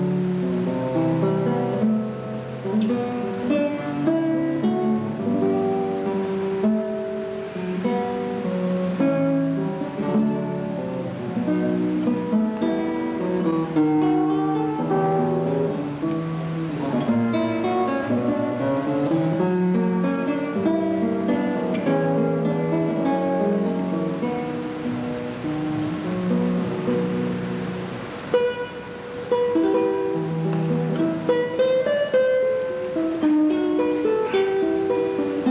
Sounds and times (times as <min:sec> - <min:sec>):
Acoustic guitar: 0:00.0 - 0:35.5
Strum: 0:00.0 - 0:35.5.